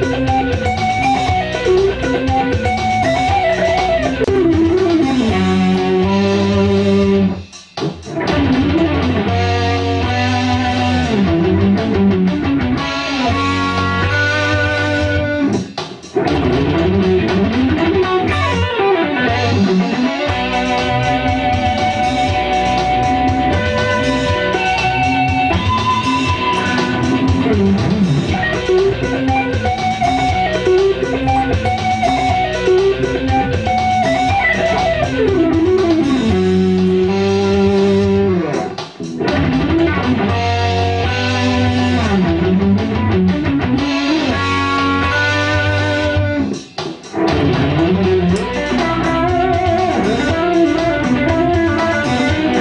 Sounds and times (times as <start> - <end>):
Electric guitar: 0.0 - 52.6
Strum: 0.0 - 52.6.